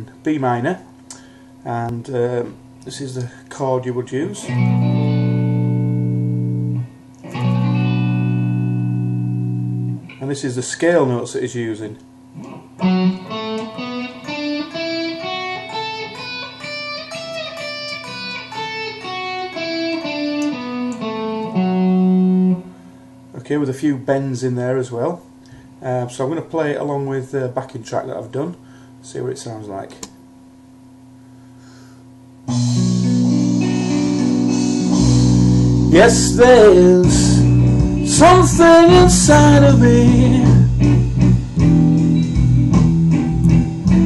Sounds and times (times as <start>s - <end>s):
Speech: 0.0s - 0.9s, 1.7s - 4.5s, 10.2s - 12.0s, 23.4s - 25.2s, 25.8s - 30.1s
Guitar: 0.0s - 23.4s, 32.5s - 44.0s.